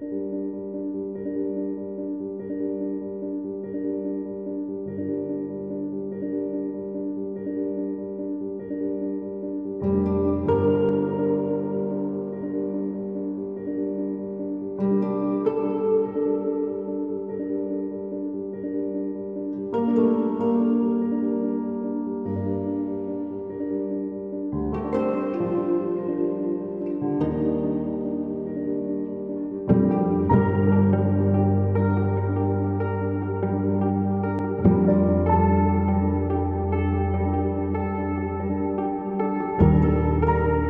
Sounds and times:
Music: 0.0s - 40.6s.

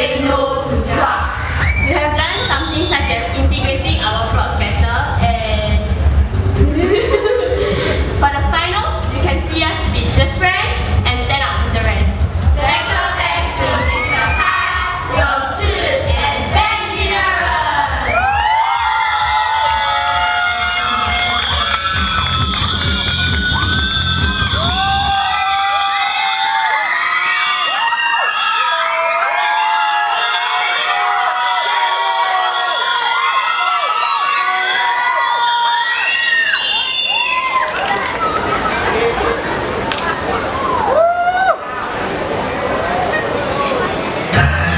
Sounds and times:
Music: 0.0s - 25.6s
Speech: 1.9s - 5.9s, 8.2s - 14.3s.

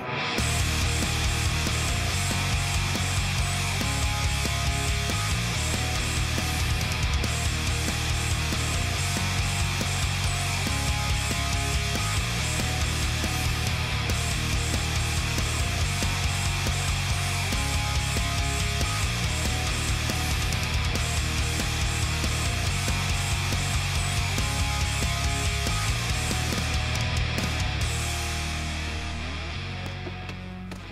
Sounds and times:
Music: 0.0s - 30.9s.

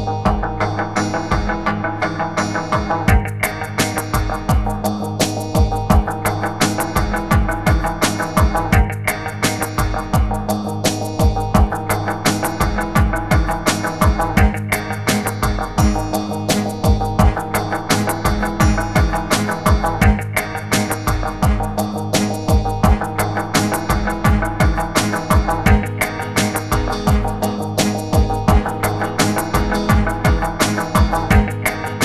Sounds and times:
Music: 0.0s - 32.0s.

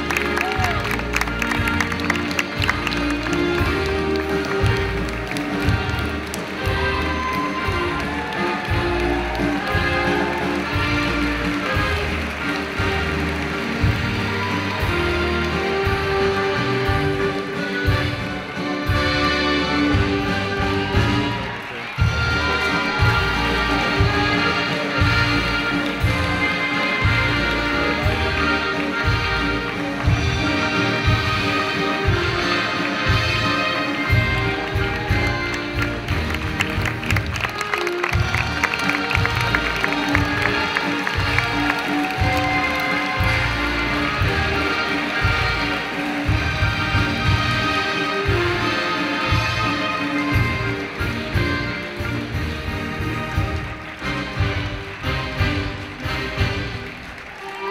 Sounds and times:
Music: 0.0s - 57.7s.

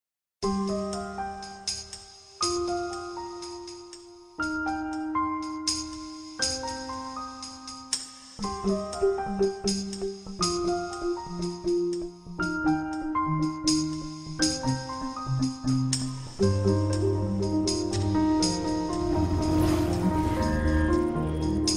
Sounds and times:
New-age music: 0.4s - 21.7s.

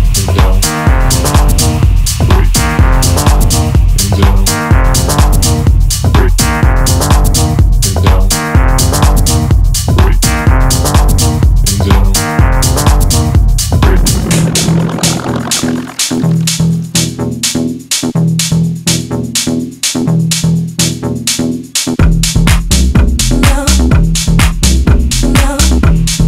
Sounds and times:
House music: 0.0s - 17.1s, 22.5s - 26.0s
Sampler: 13.8s - 16.8s.

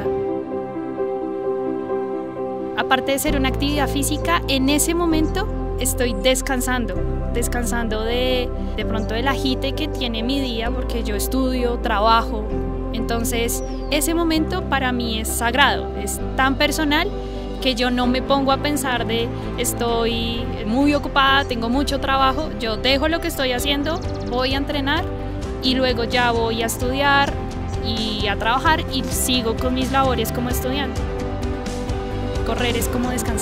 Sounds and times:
Music: 0.0s - 33.4s
Speech: 2.8s - 30.9s, 32.5s - 33.4s.

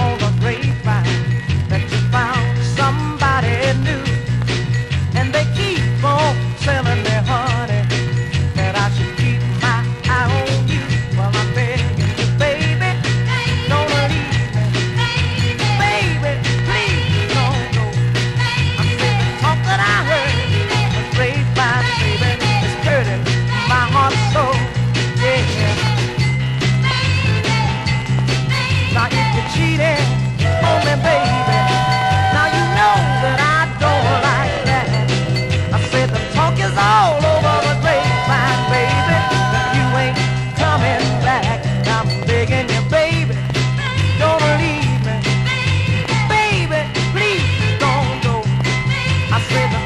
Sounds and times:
Music: 0.0s - 49.8s.

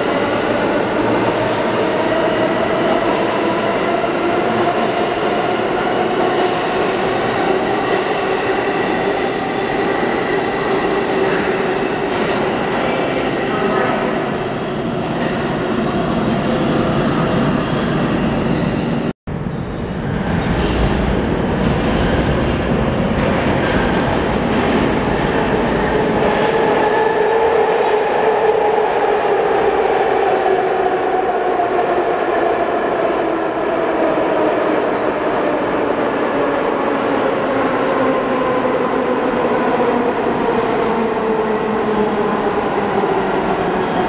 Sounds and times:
Speech: 12.5s - 14.3s.

